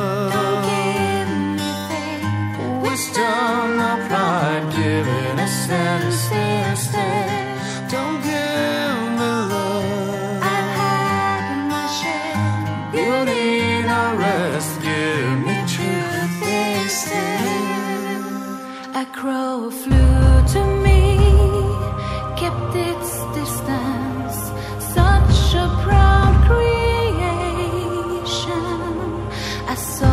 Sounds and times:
Music: 0.0s - 30.1s.

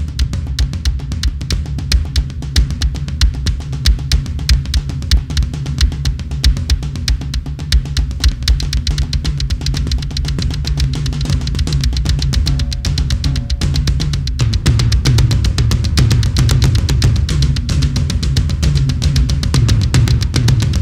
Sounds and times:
Bass drum: 0.0s - 20.8s
Drum kit: 0.0s - 20.8s.

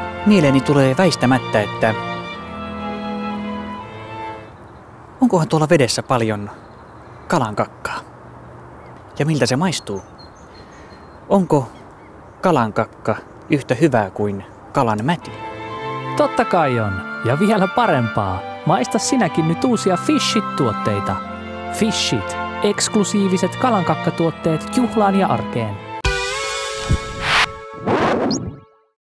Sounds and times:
Music: 0.0s - 4.6s, 15.2s - 29.0s
Speech: 0.3s - 2.0s, 5.2s - 6.6s, 7.3s - 8.1s, 9.2s - 10.0s, 11.3s - 11.8s, 12.4s - 15.3s, 16.2s - 21.2s, 21.8s - 25.8s.

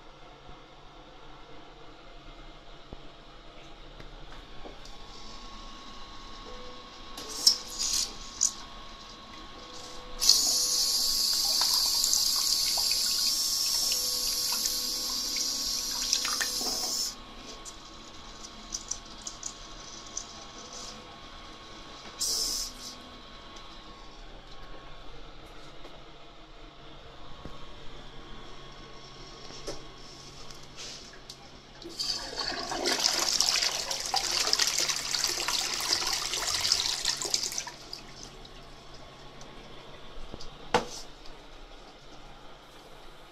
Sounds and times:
Bathtub (filling or washing): 10.2s - 17.0s, 31.8s - 38.8s
Water: 11.3s - 16.8s.

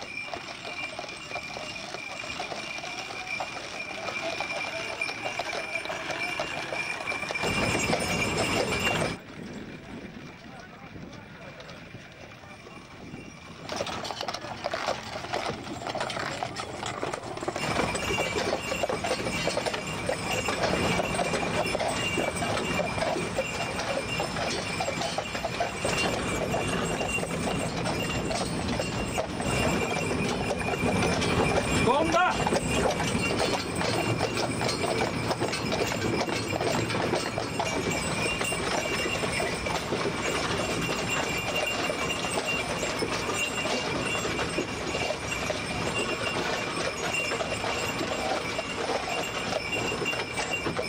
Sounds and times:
Speech: 10.3s - 12.8s, 31.8s - 32.5s.

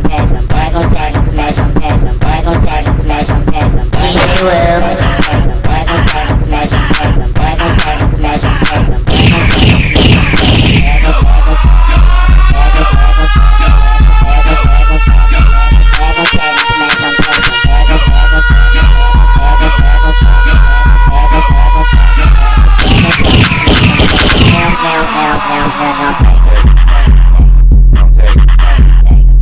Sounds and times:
Music: 0.0s - 29.4s.

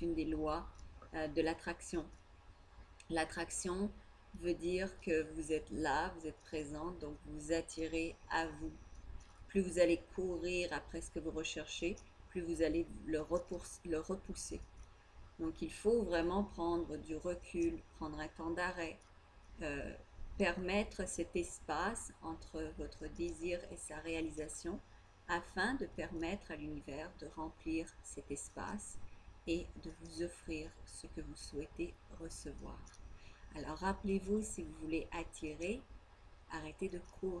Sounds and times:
Speech: 0.0s - 2.2s, 3.1s - 8.8s, 9.5s - 14.6s, 15.4s - 19.0s, 19.6s - 32.9s, 33.5s - 35.8s, 36.5s - 37.4s.

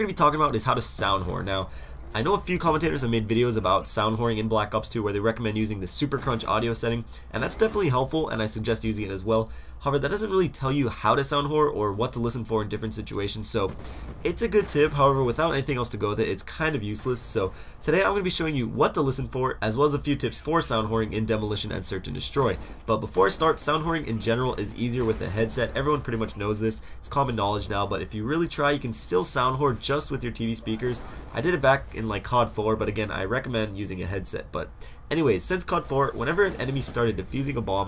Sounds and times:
Speech: 0.0s - 37.8s.

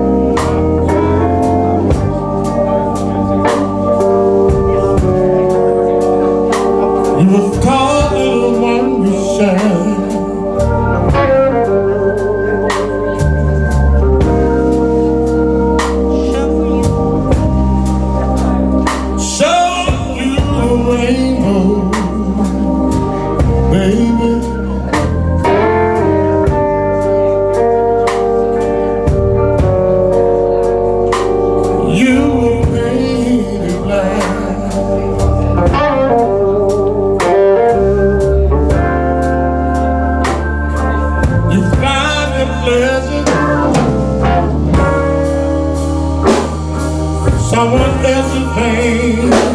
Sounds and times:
Music: 0.0s - 49.5s.

